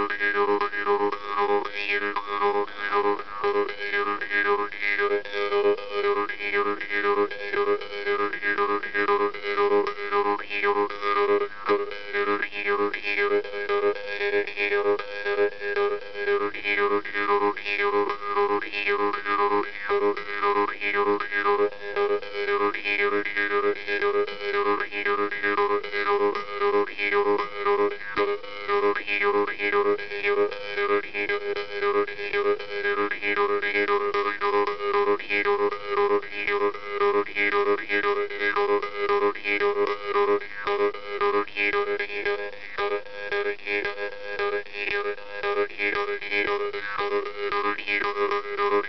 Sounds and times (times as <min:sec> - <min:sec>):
Music: 0:00.0 - 0:48.8.